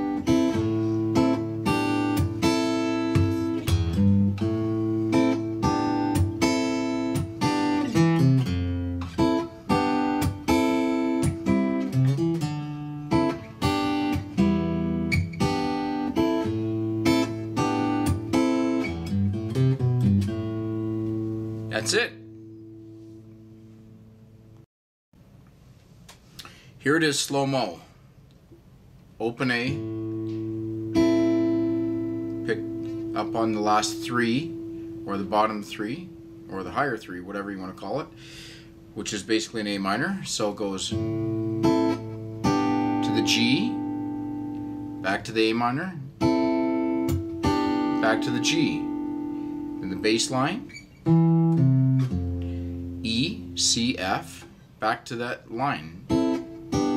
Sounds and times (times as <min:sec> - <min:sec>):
Music: 0:00.0 - 0:24.6, 0:29.7 - 0:36.5, 0:40.9 - 0:54.0, 0:56.0 - 0:56.9.